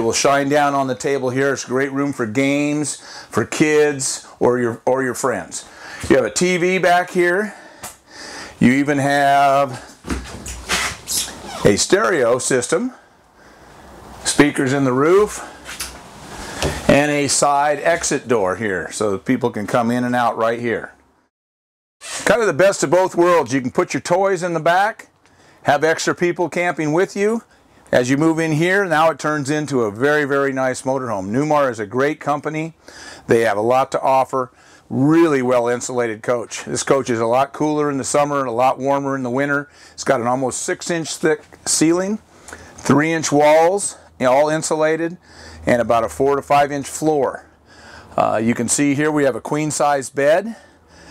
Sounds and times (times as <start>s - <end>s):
Speech: 0.0s - 7.6s, 8.6s - 9.9s, 11.5s - 13.0s, 14.2s - 15.5s, 16.9s - 21.0s, 22.2s - 25.1s, 25.7s - 42.2s, 42.8s - 47.5s, 48.2s - 50.6s.